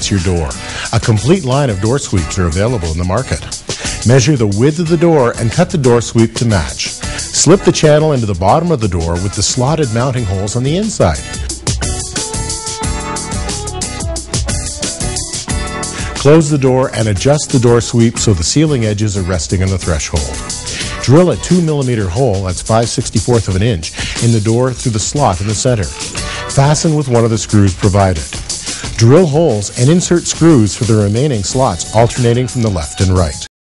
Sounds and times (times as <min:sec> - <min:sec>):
Speech: 0:00.0 - 0:11.2, 0:16.2 - 0:20.4, 0:21.0 - 0:25.9, 0:26.5 - 0:28.4, 0:29.0 - 0:33.5
Music: 0:00.0 - 0:33.5.